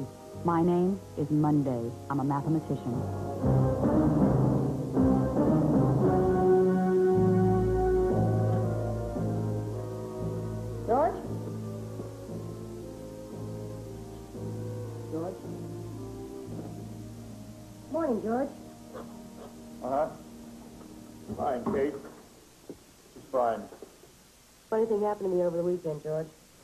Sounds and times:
Music: 0.0s - 22.4s, 24.8s - 26.2s.

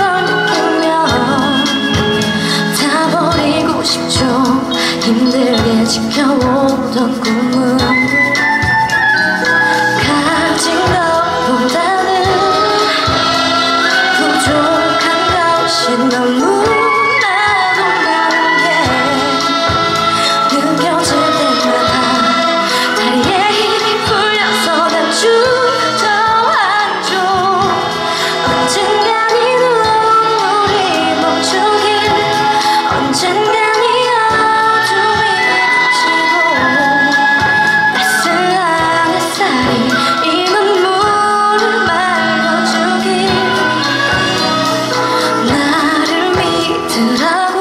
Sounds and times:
Traditional music: 0.0s - 47.6s.

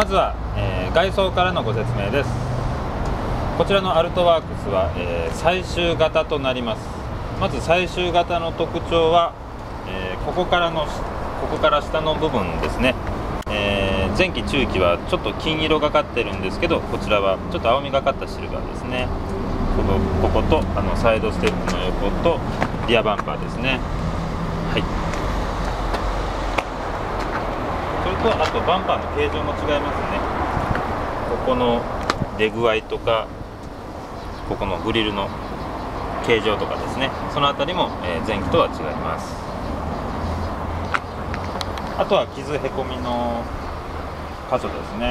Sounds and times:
Speech: 0.0s - 2.5s, 3.6s - 19.1s, 19.8s - 23.8s, 28.0s - 30.3s, 31.3s - 33.3s, 34.5s - 35.4s, 36.2s - 39.5s, 42.0s - 43.5s, 44.5s - 45.1s.

